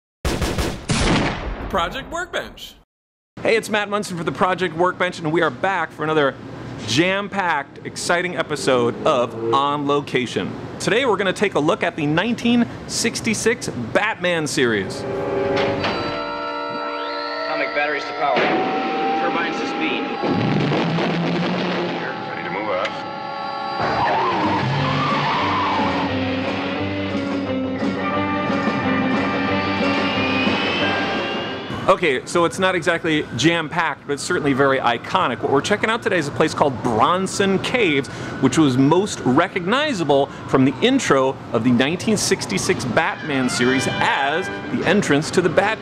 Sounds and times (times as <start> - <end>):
Gunshot, gunfire: 0.2 - 2.0, 20.4 - 22.0.